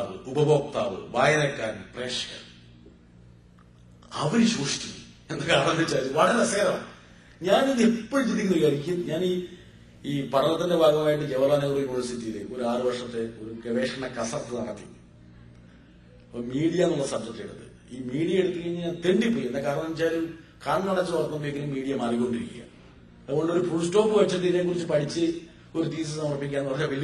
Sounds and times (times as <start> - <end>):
Male speech, man speaking: 0.0 - 2.6, 4.1 - 15.0, 16.3 - 22.7, 23.3 - 27.0
Narration, monologue: 0.0 - 27.0.